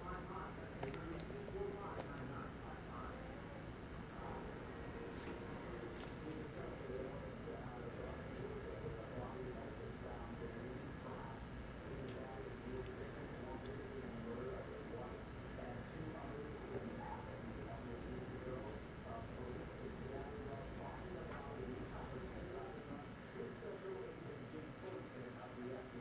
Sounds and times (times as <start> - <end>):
Speech: 0.0 - 26.0.